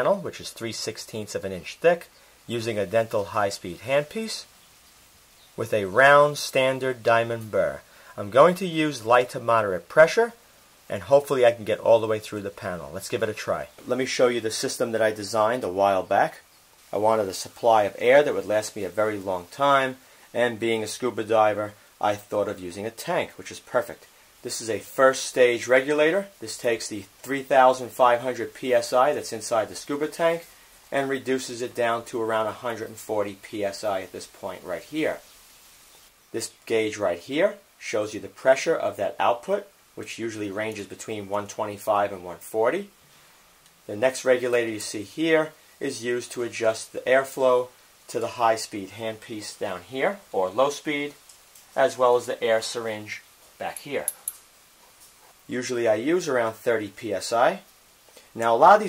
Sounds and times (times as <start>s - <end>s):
Speech: 0.0s - 4.5s, 5.6s - 35.3s, 36.3s - 43.0s, 43.9s - 51.2s, 51.8s - 54.2s, 55.5s - 57.7s, 58.4s - 58.8s.